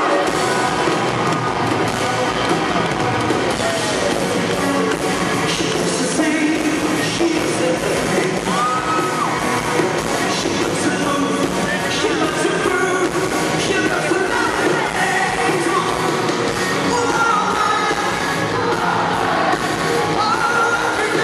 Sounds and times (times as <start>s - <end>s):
Singing: 10.3s - 16.2s, 20.1s - 21.2s.